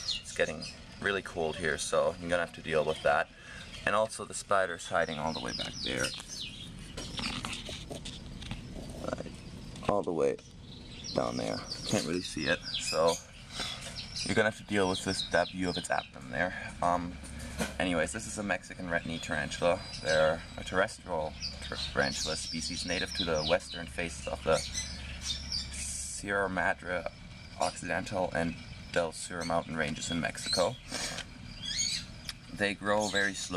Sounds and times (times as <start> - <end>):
Chirp, tweet: 0.0 - 33.5
Outside, rural or natural: 0.0 - 33.5
Speech: 0.3 - 6.2, 9.0 - 10.4, 11.1 - 13.2, 14.3 - 17.2, 17.8 - 24.7, 25.8 - 30.8, 32.5 - 33.5.